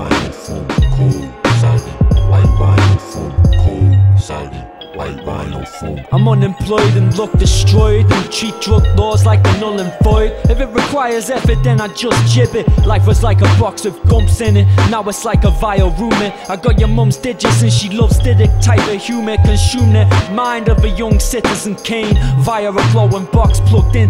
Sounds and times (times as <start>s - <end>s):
Music: 0.0s - 24.0s.